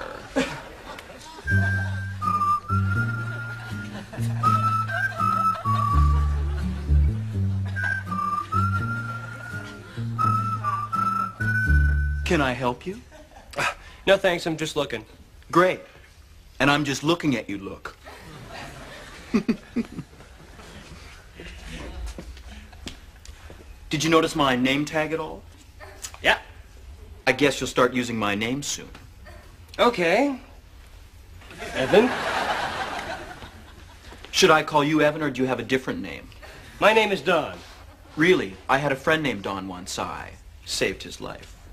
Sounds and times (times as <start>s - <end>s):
Music: 1.4s - 12.6s
Speech: 14.1s - 15.9s, 16.6s - 18.0s, 29.8s - 30.5s, 31.8s - 32.1s, 34.4s - 37.6s, 38.2s - 41.6s.